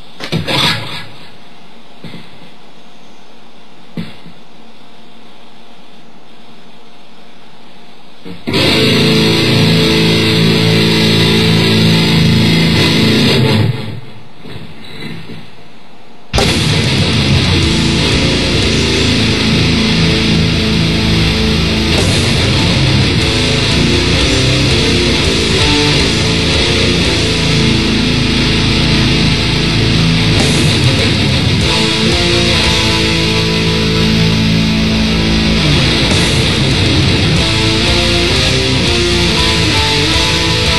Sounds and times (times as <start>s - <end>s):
Electric guitar: 8.2s - 15.3s, 16.3s - 40.7s.